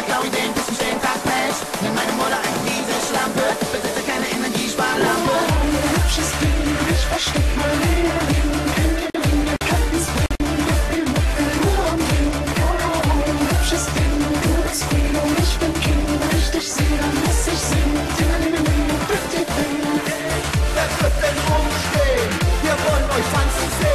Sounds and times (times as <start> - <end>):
Music: 0.0 - 23.9.